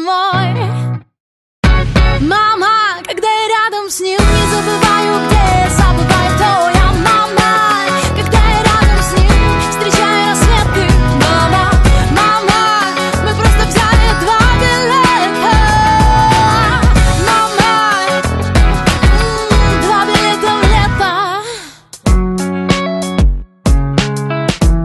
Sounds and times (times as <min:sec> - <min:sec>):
Independent music: 0:01.7 - 0:24.8
Exciting music: 0:04.2 - 0:21.1.